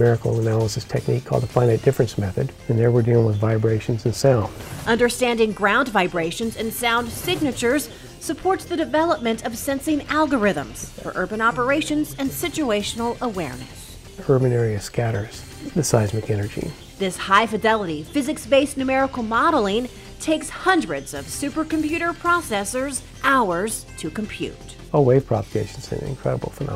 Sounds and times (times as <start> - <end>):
Speech: 0.0 - 7.6, 14.2 - 18.0, 25.0 - 26.7
Music: 0.0 - 26.7.